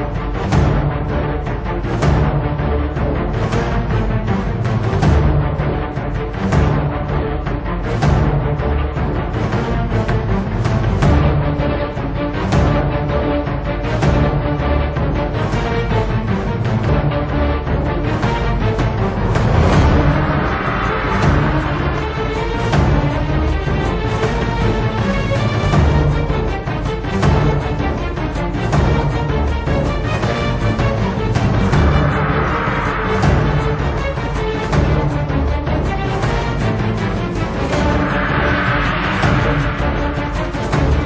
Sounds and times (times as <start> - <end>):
Music: 0.0 - 41.0.